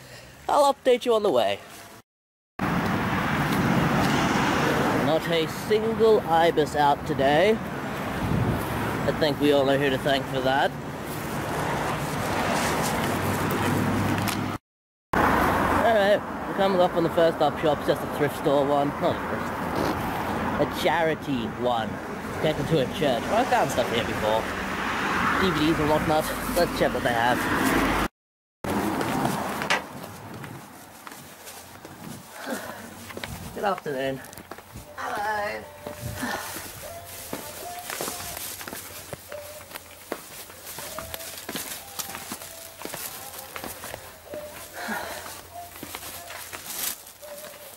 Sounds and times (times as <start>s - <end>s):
Speech: 0.5s - 1.7s, 9.1s - 10.8s, 15.8s - 19.3s, 20.6s - 24.5s, 25.4s - 27.4s.